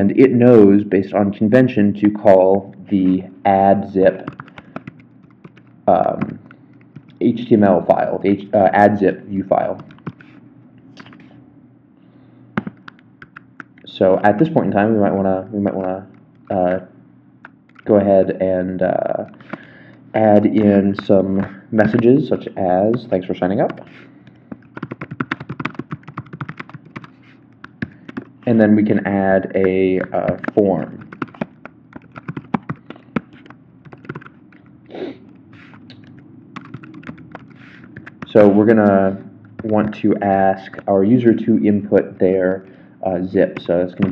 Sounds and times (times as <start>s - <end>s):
Speech: 0.0s - 4.3s, 5.9s - 6.4s, 7.2s - 9.8s, 13.9s - 16.9s, 17.9s - 19.3s, 20.2s - 23.8s, 28.5s - 31.0s, 38.3s - 44.1s.